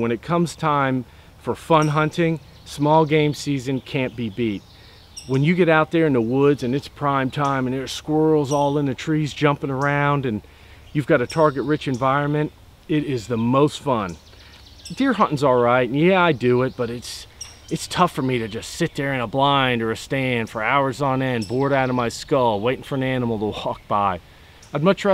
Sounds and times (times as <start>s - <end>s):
Speech: 0.0s - 4.6s, 5.3s - 10.4s, 11.0s - 14.2s, 14.9s - 24.2s, 24.8s - 25.1s.